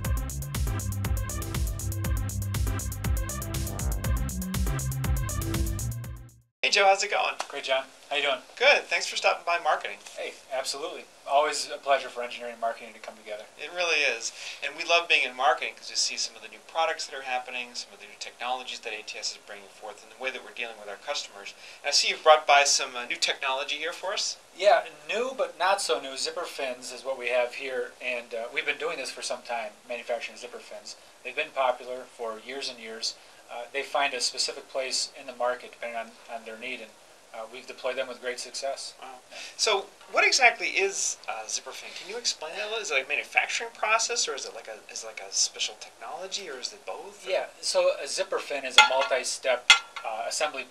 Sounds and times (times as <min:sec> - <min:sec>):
Speech: 0:06.6 - 0:50.7.